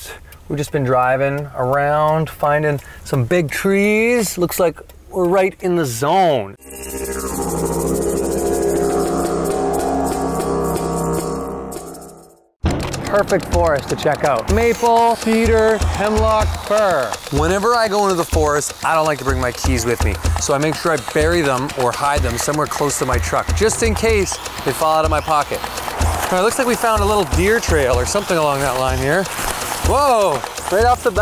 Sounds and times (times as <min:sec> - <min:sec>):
Speech: 0:00.0 - 0:06.6, 0:13.1 - 0:25.6, 0:26.3 - 0:29.3, 0:29.9 - 0:31.2
Music: 0:06.6 - 0:31.2.